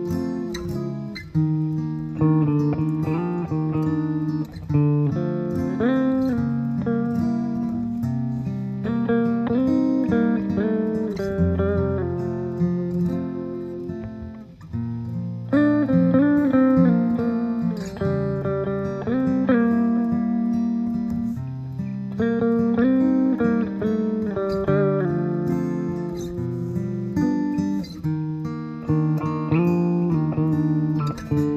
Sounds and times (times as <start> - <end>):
Electric guitar: 0.0 - 31.5
Strum: 0.0 - 31.5.